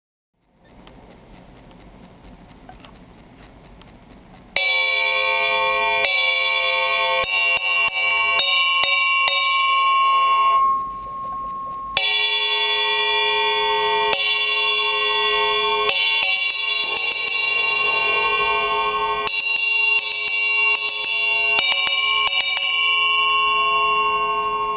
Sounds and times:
Drum kit: 4.6s - 9.7s, 14.1s - 22.6s.

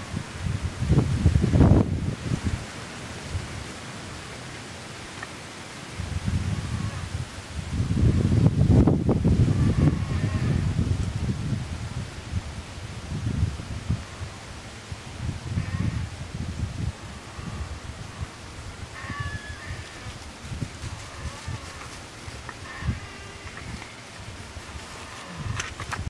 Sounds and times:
White noise: 0.0s - 26.1s.

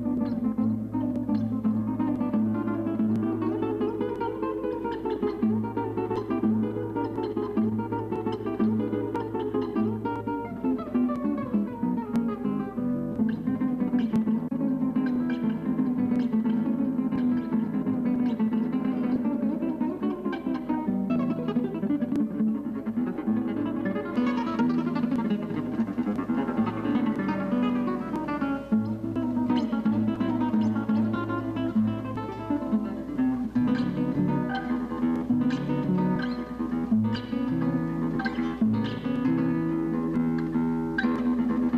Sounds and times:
Guitar: 0.0s - 41.7s.

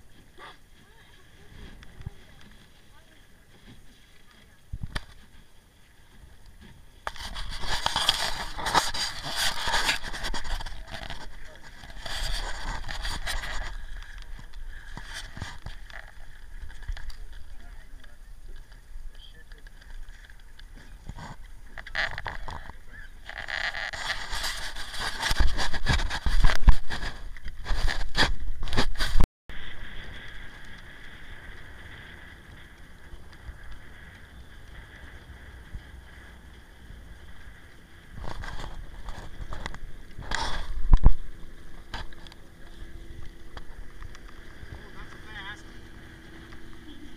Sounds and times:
Boat, Water vehicle: 0.0s - 47.1s.

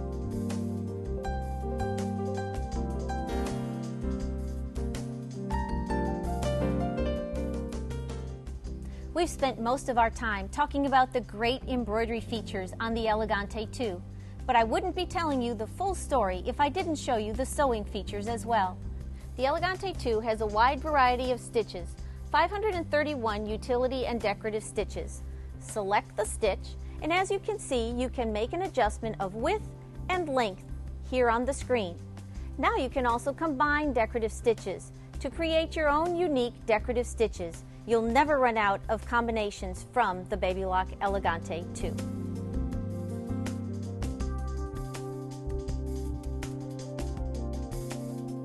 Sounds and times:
Music: 0.0s - 48.4s
Speech: 9.2s - 18.8s, 19.4s - 32.0s, 32.6s - 42.0s.

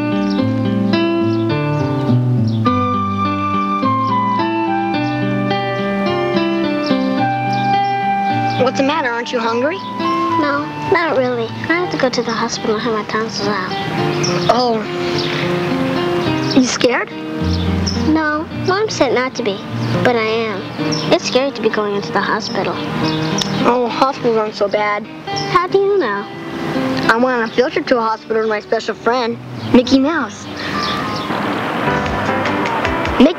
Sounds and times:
Music: 0.0s - 33.3s
Speech: 8.6s - 9.8s, 10.4s - 13.8s, 14.4s - 15.0s, 16.6s - 17.2s, 18.1s - 22.8s, 23.6s - 26.3s, 27.0s - 30.6s.

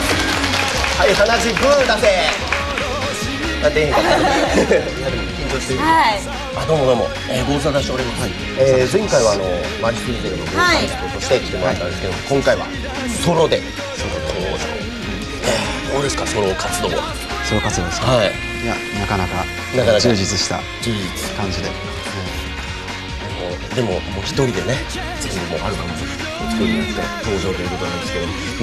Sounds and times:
Music: 0.0s - 28.6s
Speech: 23.3s - 28.6s.

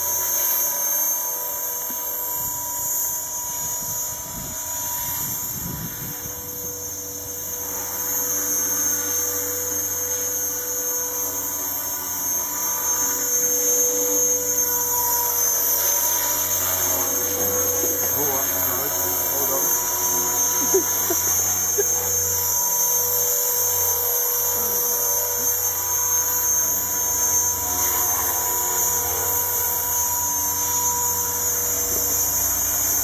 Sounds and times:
Helicopter: 0.0s - 33.0s
Speech: 17.8s - 20.0s.

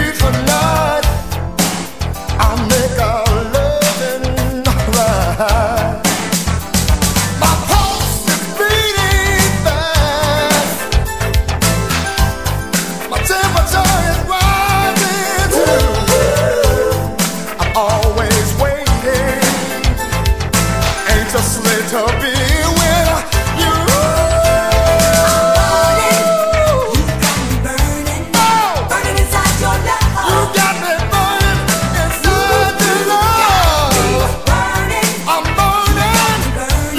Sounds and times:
Music: 0.0s - 36.9s.

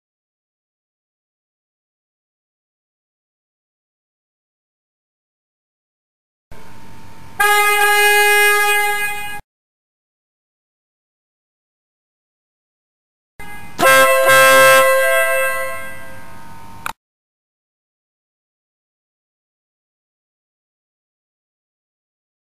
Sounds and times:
Vehicle horn, car horn, honking: 7.4s - 9.4s, 13.4s - 16.4s.

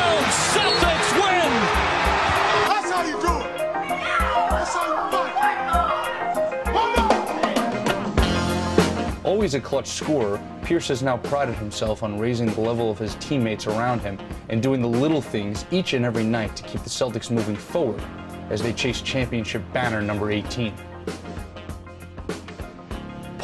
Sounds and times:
Music: 0.0s - 23.4s
Speech: 9.3s - 20.8s.

